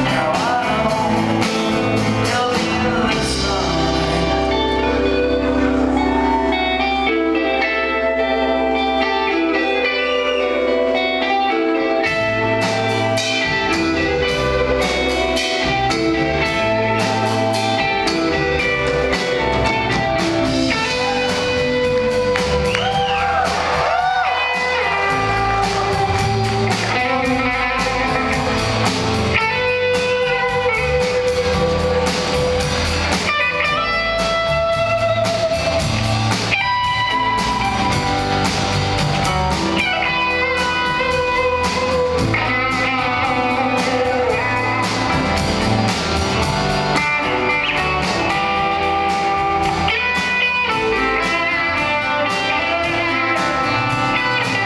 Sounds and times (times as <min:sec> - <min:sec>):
Electric guitar: 0:00.0 - 0:54.6.